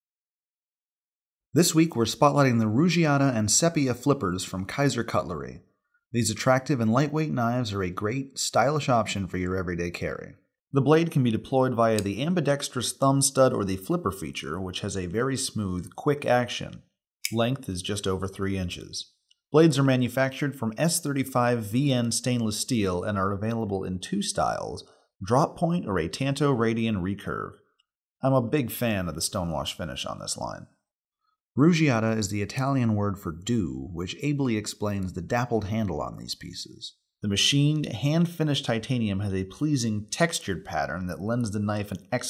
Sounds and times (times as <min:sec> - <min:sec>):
Speech: 0:01.6 - 0:05.6, 0:06.2 - 0:27.6, 0:28.2 - 0:30.8, 0:31.6 - 0:42.2.